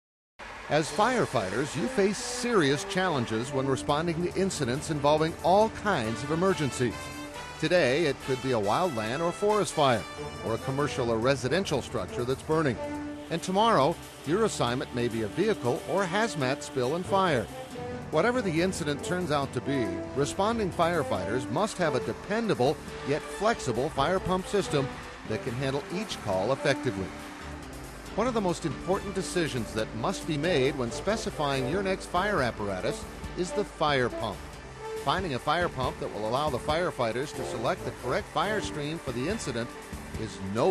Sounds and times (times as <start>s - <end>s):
Music: 0.4s - 40.7s
Speech: 0.7s - 7.0s, 7.6s - 17.5s, 18.2s - 27.1s, 28.2s - 34.4s, 35.1s - 40.7s.